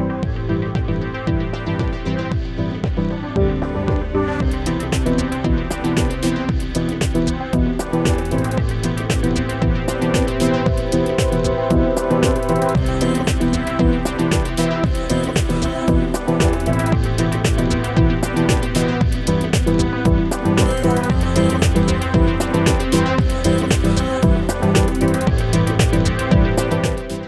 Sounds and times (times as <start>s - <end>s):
Music: 0.0s - 27.2s.